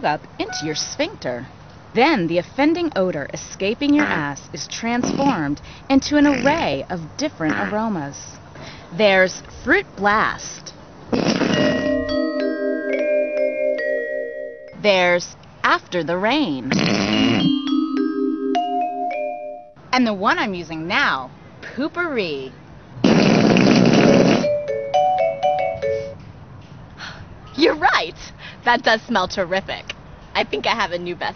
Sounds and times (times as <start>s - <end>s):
Marimba, xylophone: 0.5s - 1.0s, 11.6s - 14.8s, 17.5s - 19.8s, 24.5s - 26.2s
Glockenspiel: 11.6s - 14.8s, 17.6s - 19.8s, 24.5s - 26.2s.